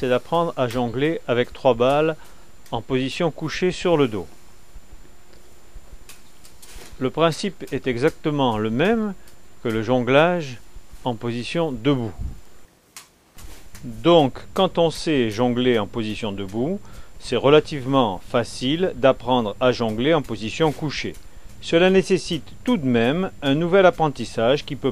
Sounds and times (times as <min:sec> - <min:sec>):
Speech: 0:00.0 - 0:04.4, 0:07.0 - 0:12.3, 0:13.8 - 0:24.9.